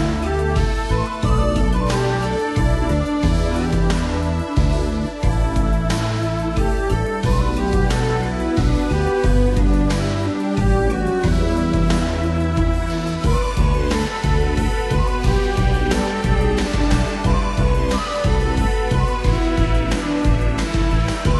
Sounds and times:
Music: 0:00.0 - 0:21.3.

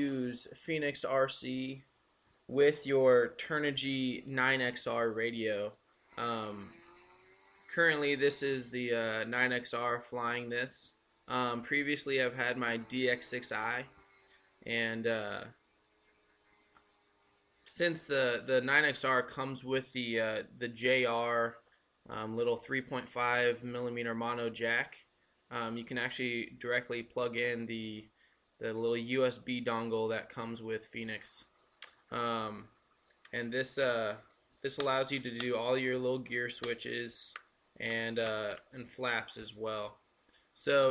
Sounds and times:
Speech: 0:00.0 - 0:01.8, 0:02.5 - 0:06.7, 0:07.7 - 0:13.9, 0:14.7 - 0:15.5, 0:17.7 - 0:31.5, 0:32.2 - 0:32.7, 0:33.3 - 0:40.0, 0:40.6 - 0:40.9.

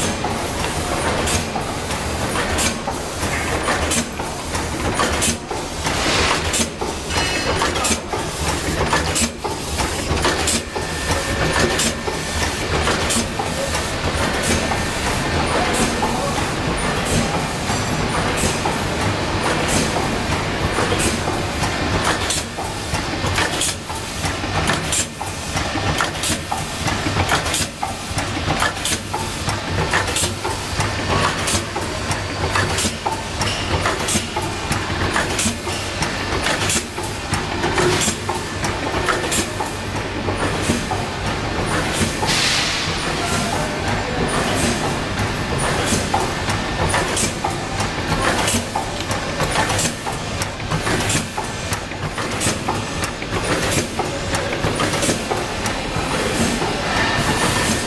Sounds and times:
Inside, large room or hall: 0:00.0 - 0:57.8.

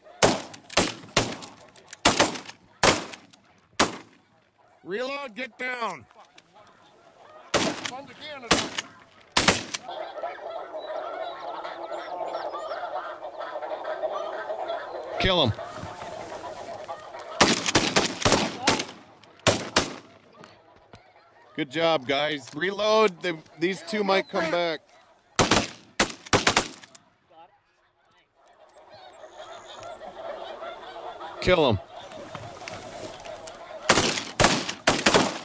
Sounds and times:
Honk: 0:00.0 - 0:00.5, 0:04.4 - 0:22.0, 0:22.8 - 0:25.5, 0:27.3 - 0:35.4.

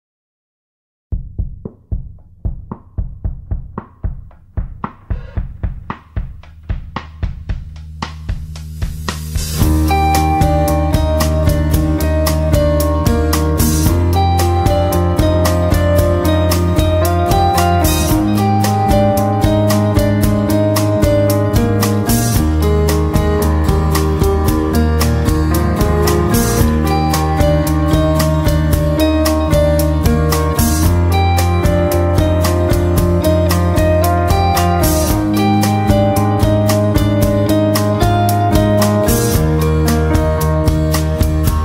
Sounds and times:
Drum: 0:01.1 - 0:41.6.

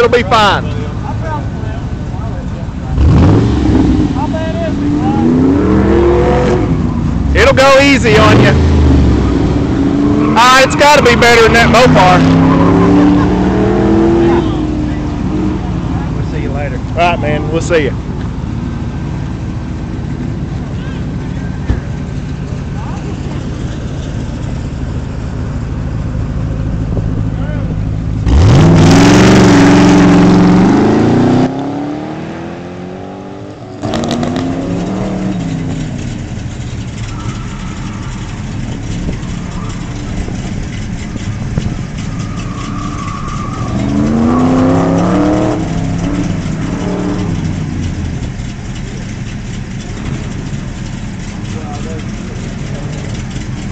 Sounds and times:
Speech: 0:07.4 - 0:08.6, 0:10.4 - 0:12.2, 0:27.3 - 0:27.8, 0:51.5 - 0:53.1.

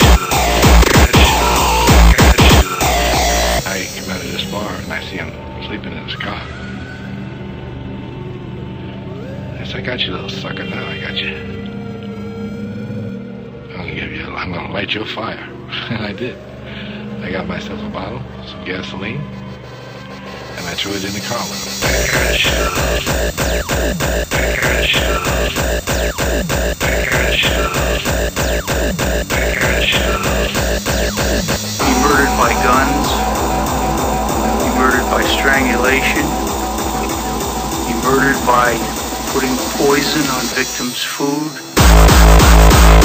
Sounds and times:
Music: 0:00.0 - 0:43.0
Speech: 0:03.6 - 0:06.5, 0:09.6 - 0:11.5, 0:13.7 - 0:16.4, 0:17.2 - 0:19.3, 0:20.6 - 0:23.0, 0:24.4 - 0:25.5, 0:26.8 - 0:28.0, 0:29.4 - 0:30.5, 0:31.8 - 0:33.3, 0:34.5 - 0:36.4, 0:37.9 - 0:41.6.

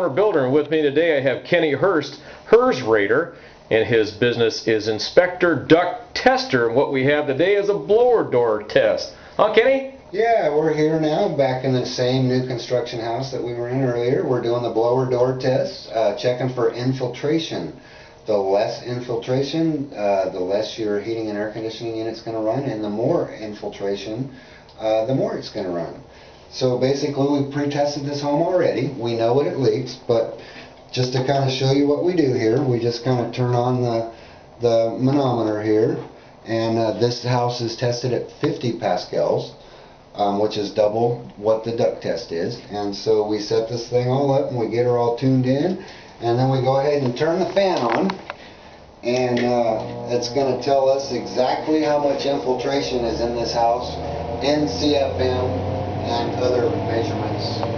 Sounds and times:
Speech: 0:00.0 - 0:48.2, 0:49.0 - 0:57.7.

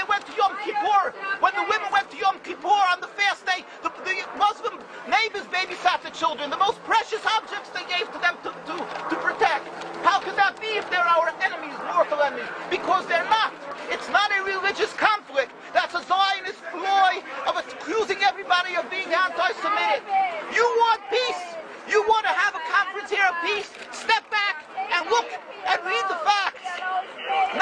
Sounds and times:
Outside, urban or manmade: 0:00.0 - 0:27.6
Speech: 0:00.0 - 0:27.6.

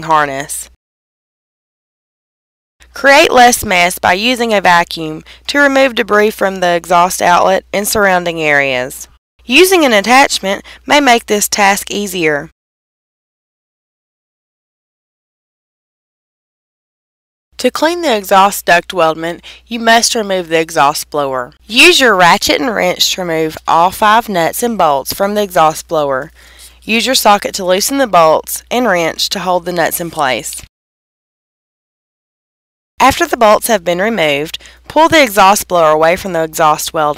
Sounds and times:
Speech: 0:00.0 - 0:00.7, 0:03.0 - 0:12.5, 0:17.6 - 0:30.7, 0:33.0 - 0:37.1.

